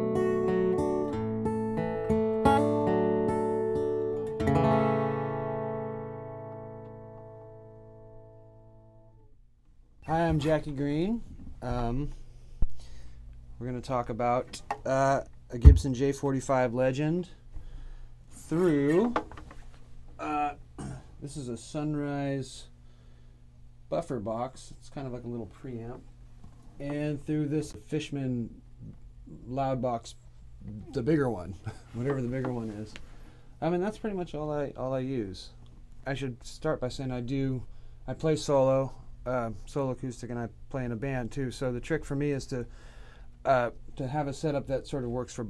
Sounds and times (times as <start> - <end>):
Speech: 10.0 - 12.2, 13.6 - 17.4, 18.4 - 19.2, 20.2 - 20.6, 21.2 - 22.7, 23.9 - 26.0, 26.8 - 33.0, 33.6 - 42.7, 43.4 - 45.4.